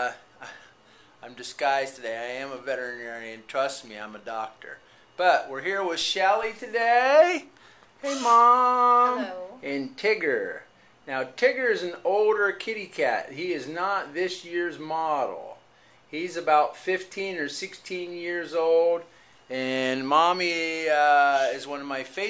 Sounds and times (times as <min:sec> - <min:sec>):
Speech: 0:01.2 - 0:22.2.